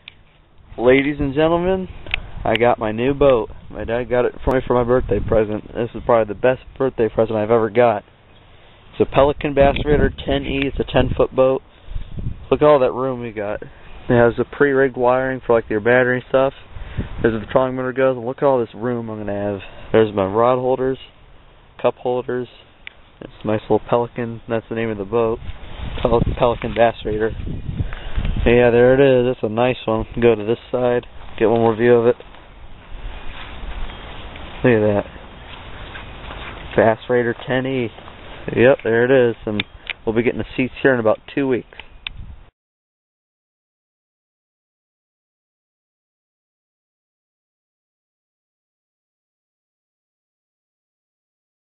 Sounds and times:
Speech: 0:00.8 - 0:08.0, 0:09.0 - 0:11.6, 0:12.5 - 0:16.6, 0:17.2 - 0:21.1, 0:21.8 - 0:25.4, 0:26.0 - 0:27.4, 0:28.4 - 0:32.2, 0:34.6 - 0:35.1, 0:36.8 - 0:41.8.

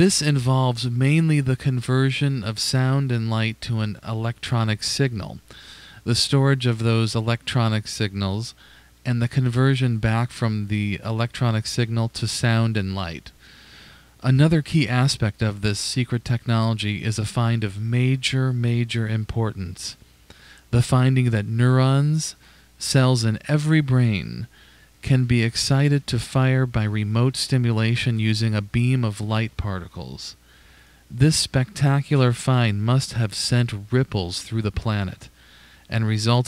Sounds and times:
Speech: 0:00.0 - 0:13.4, 0:14.2 - 0:20.0, 0:20.7 - 0:30.4, 0:31.1 - 0:36.4.

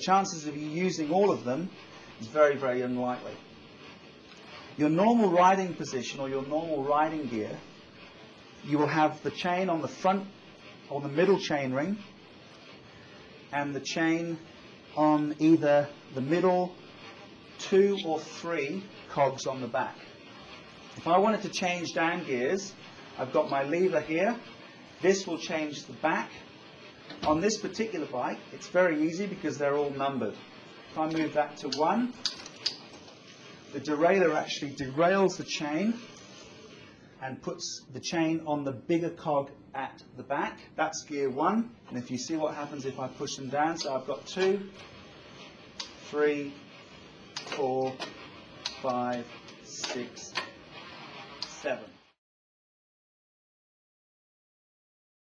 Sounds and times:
Speech: 0:00.0 - 0:03.5, 0:04.8 - 0:07.7, 0:08.6 - 0:12.1, 0:13.5 - 0:16.8, 0:17.6 - 0:20.1, 0:21.0 - 0:26.5, 0:27.1 - 0:32.3, 0:33.7 - 0:36.2, 0:37.2 - 0:44.9, 0:45.8 - 0:46.7, 0:47.4 - 0:50.5, 0:51.4 - 0:52.1.

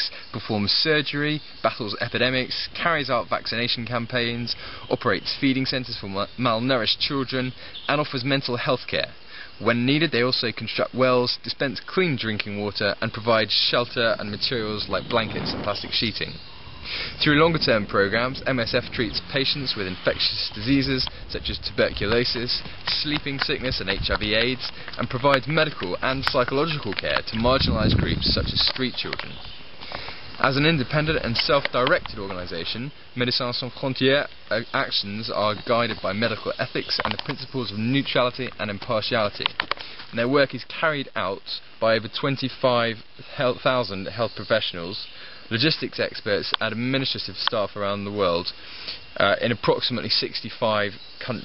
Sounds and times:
Speech: 0:00.0 - 0:16.4, 0:17.2 - 0:29.4, 0:30.4 - 0:48.6, 0:49.2 - 0:51.4
Outside, rural or natural: 0:00.0 - 0:51.4.

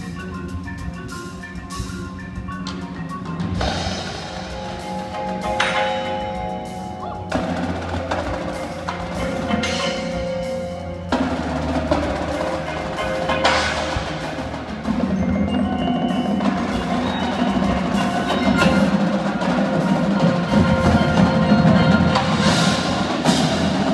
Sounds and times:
Percussion: 0:00.0 - 0:23.9.

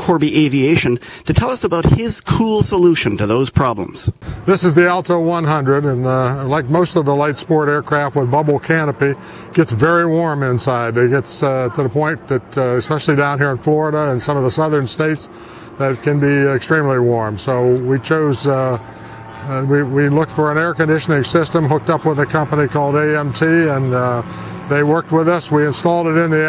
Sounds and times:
Speech: 0:00.0 - 0:18.8, 0:19.4 - 0:26.4.

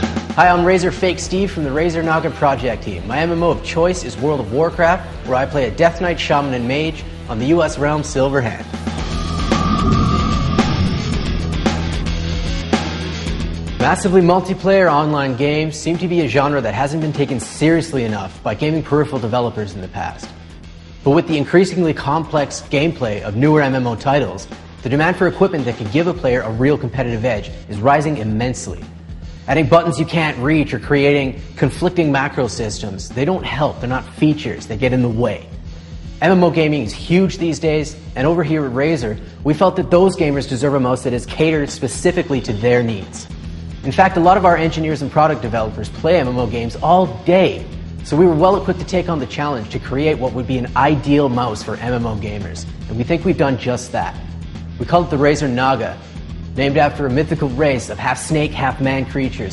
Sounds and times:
Music: 0:00.0 - 0:59.5
Speech: 0:00.4 - 0:08.8, 0:13.8 - 0:20.4, 0:21.0 - 0:28.9, 0:29.5 - 0:35.5, 0:36.2 - 0:54.2, 0:54.8 - 0:56.0, 0:56.6 - 0:59.5.

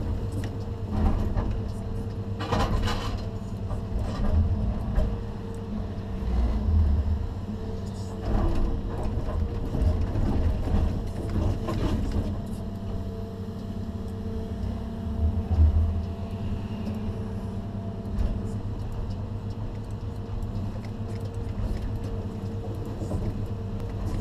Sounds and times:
Vehicle: 0:00.0 - 0:24.2.

